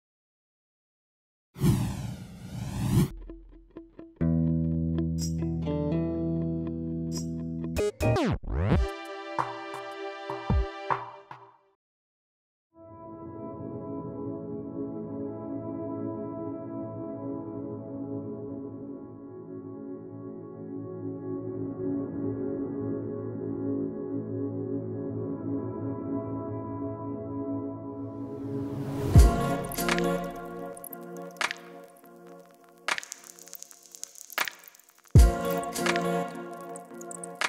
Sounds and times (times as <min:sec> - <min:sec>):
Bass guitar: 0:03.2 - 0:08.2, 0:29.2 - 0:30.5.